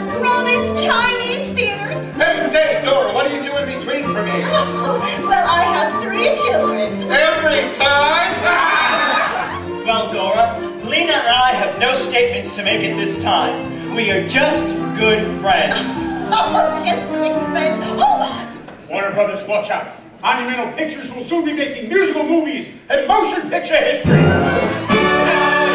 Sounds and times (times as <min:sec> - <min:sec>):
Music: 0:00.0 - 0:18.7, 0:24.0 - 0:25.7
Speech: 0:18.9 - 0:24.2.